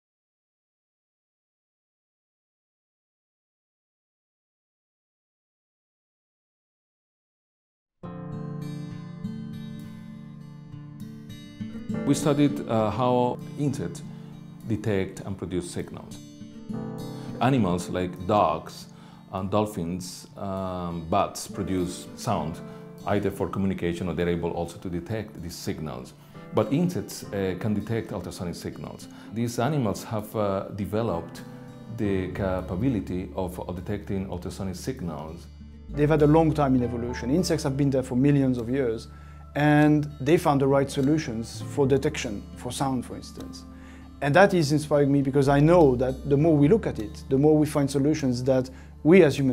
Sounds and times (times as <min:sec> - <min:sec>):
Music: 0:08.0 - 0:49.5
Speech: 0:12.0 - 0:14.0, 0:14.7 - 0:16.2, 0:17.4 - 0:43.6, 0:44.2 - 0:49.5.